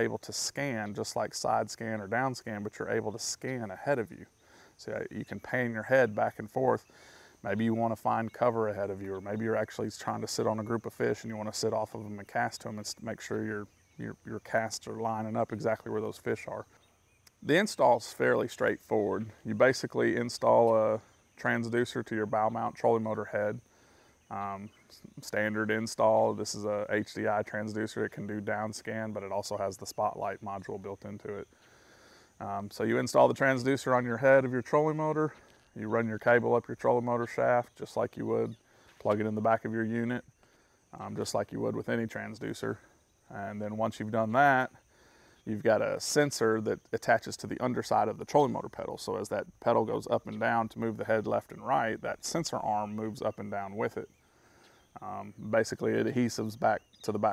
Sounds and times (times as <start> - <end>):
Speech: 0.0 - 23.7, 24.3 - 31.5, 32.4 - 40.3, 40.9 - 44.8, 45.5 - 54.2, 55.0 - 57.3.